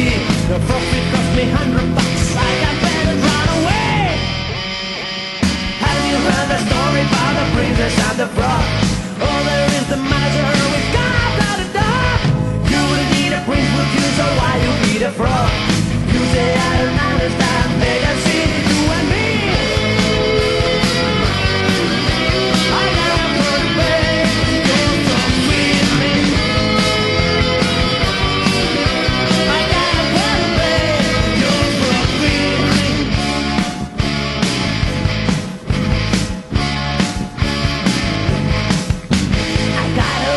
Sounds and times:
Music: 0.0 - 40.3.

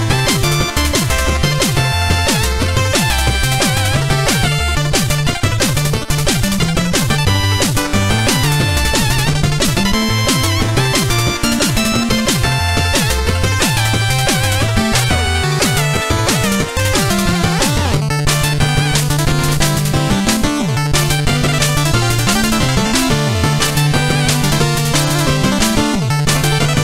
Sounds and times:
Music: 0.0 - 26.8.

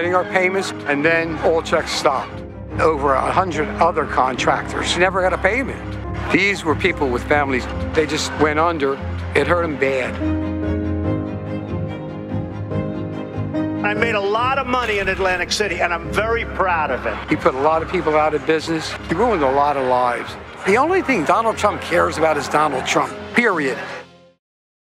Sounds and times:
Speech: 0.0 - 10.2, 13.8 - 23.9
Music: 0.0 - 24.4.

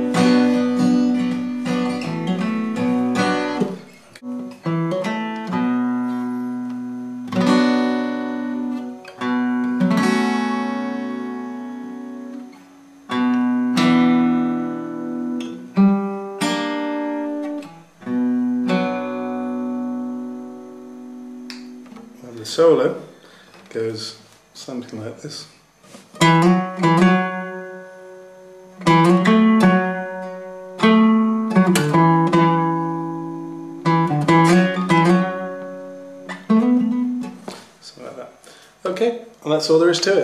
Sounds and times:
Guitar: 0.0 - 40.2.

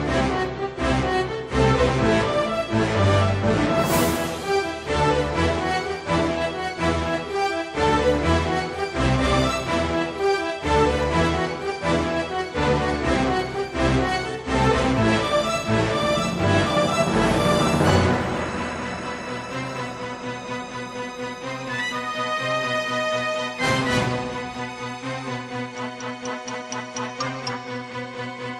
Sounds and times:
Video game music: 0.0 - 28.5.

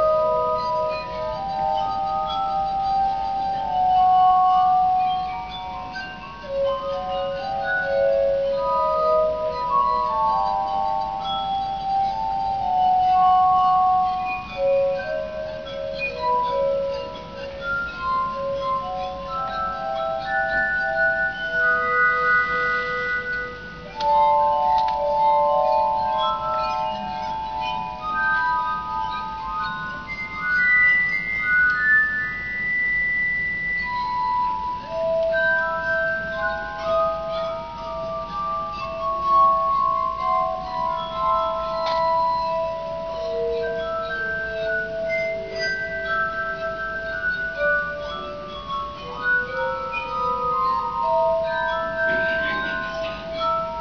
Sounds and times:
Musical instrument: 0.0 - 53.8.

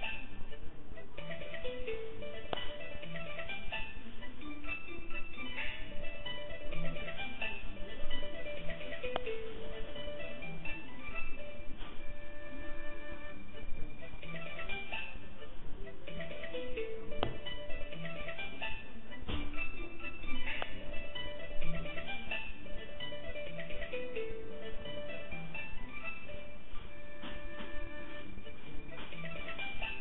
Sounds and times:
Funny music: 0.0 - 30.0.

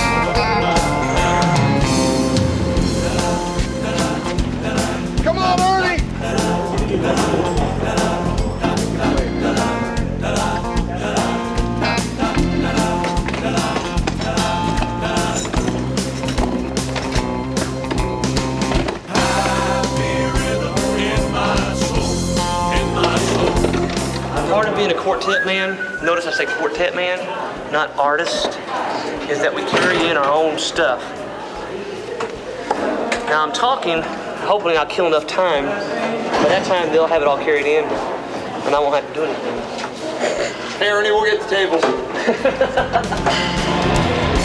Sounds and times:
Music: 0.0 - 26.7, 42.2 - 44.4.

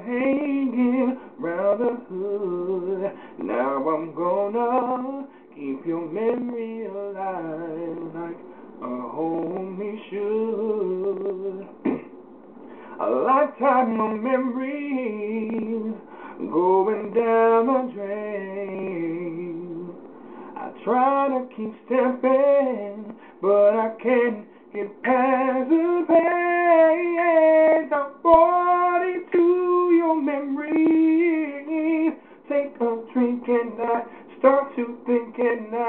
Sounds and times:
Male singing: 0.0 - 12.0, 13.0 - 20.0, 20.6 - 35.8.

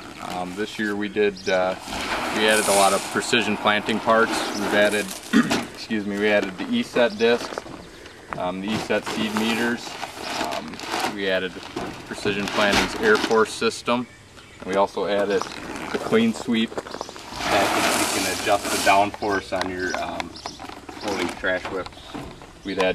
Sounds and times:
Speech: 0.2 - 5.2, 5.8 - 7.6, 8.4 - 16.7, 17.4 - 20.4, 21.0 - 22.1, 22.7 - 22.9.

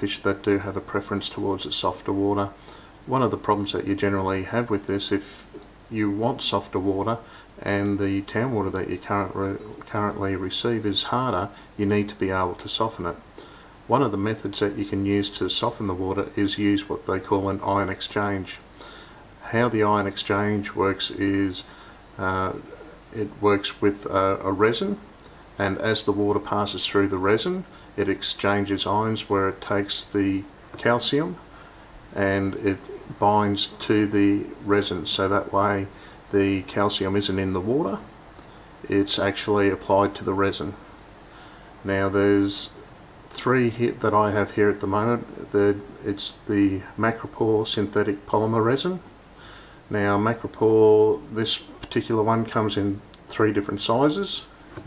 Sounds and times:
Speech: 0.0 - 13.3, 13.9 - 18.7, 19.4 - 31.5, 32.1 - 38.2, 38.8 - 40.9, 41.8 - 49.1, 49.9 - 54.8.

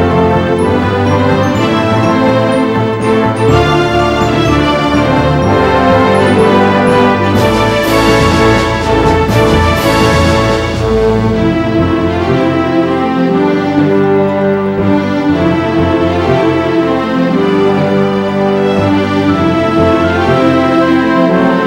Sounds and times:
Music: 0.0 - 21.6.

